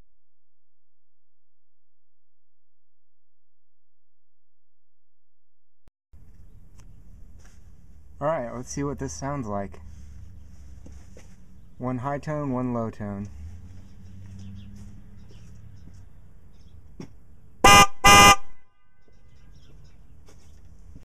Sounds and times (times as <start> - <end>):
Speech: 8.2 - 9.8, 11.8 - 13.4
Vehicle horn, car horn, honking: 17.6 - 19.3.